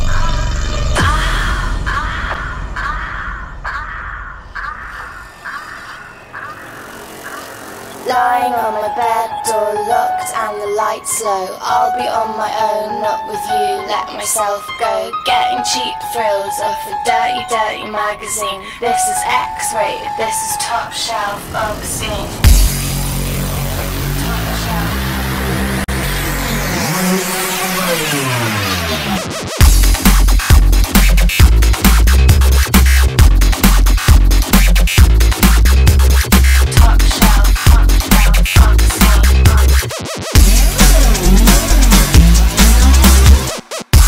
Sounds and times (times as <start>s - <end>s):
Drum and bass: 22.1s - 44.0s.